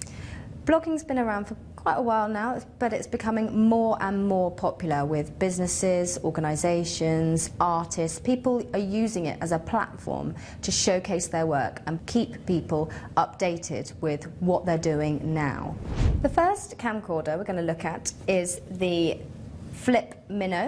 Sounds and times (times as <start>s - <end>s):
Speech: 0.7s - 20.6s.